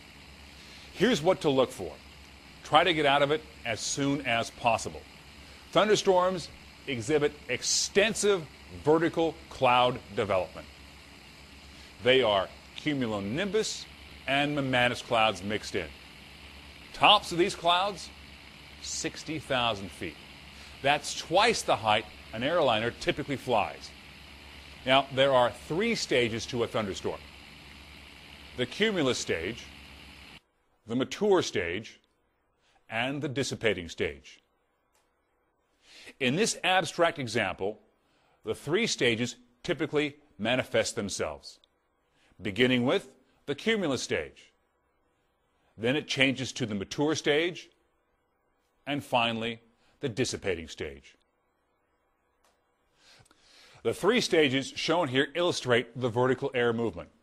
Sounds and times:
Speech: 0:01.0 - 0:02.0, 0:02.7 - 0:05.1, 0:05.7 - 0:10.7, 0:12.0 - 0:16.0, 0:17.0 - 0:18.2, 0:18.8 - 0:20.2, 0:20.8 - 0:23.9, 0:24.8 - 0:27.3, 0:28.6 - 0:29.7, 0:30.8 - 0:32.0, 0:32.9 - 0:34.4, 0:36.1 - 0:37.8, 0:38.5 - 0:41.6, 0:42.4 - 0:44.6, 0:45.8 - 0:47.8, 0:48.8 - 0:51.2, 0:53.8 - 0:57.2.

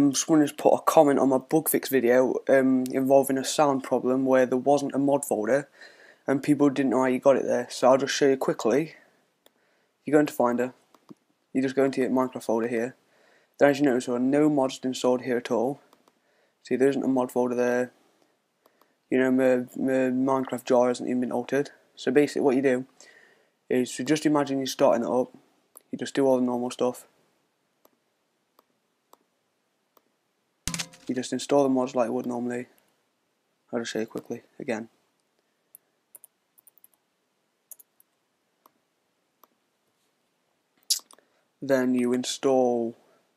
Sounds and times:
Speech: 0:00.0 - 0:05.7, 0:06.3 - 0:09.1, 0:10.0 - 0:10.8, 0:11.5 - 0:13.0, 0:13.6 - 0:15.9, 0:16.6 - 0:18.0, 0:19.1 - 0:22.9, 0:23.7 - 0:27.1, 0:31.1 - 0:32.8, 0:33.7 - 0:35.0, 0:41.6 - 0:43.0.

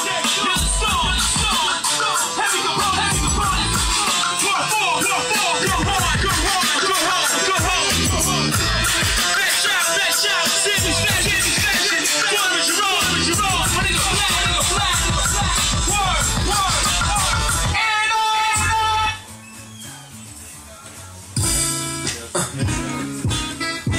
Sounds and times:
Music: 0:00.0 - 0:23.9.

